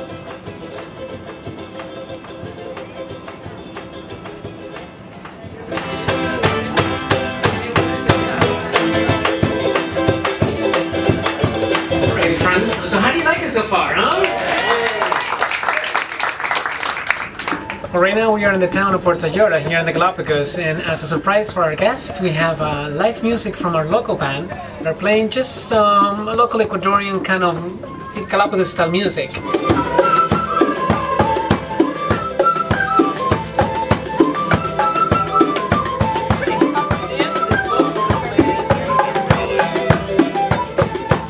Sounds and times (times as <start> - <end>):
Music: 0.0 - 13.7, 16.9 - 41.2
Speech: 12.0 - 15.1, 17.9 - 29.4.